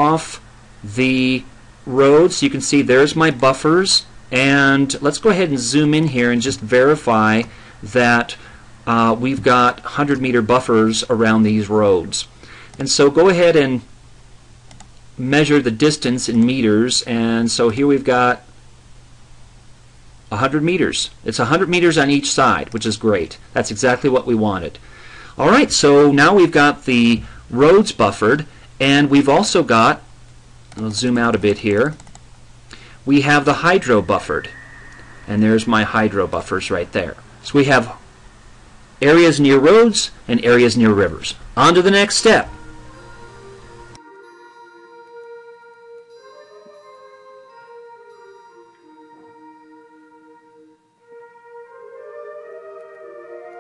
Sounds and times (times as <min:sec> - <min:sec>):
Speech: 0:00.0 - 0:13.9, 0:15.2 - 0:18.5, 0:20.3 - 0:24.8, 0:25.4 - 0:30.0, 0:30.8 - 0:32.0, 0:33.1 - 0:34.6, 0:35.3 - 0:38.0, 0:39.0 - 0:42.5
Music: 0:42.2 - 0:53.6.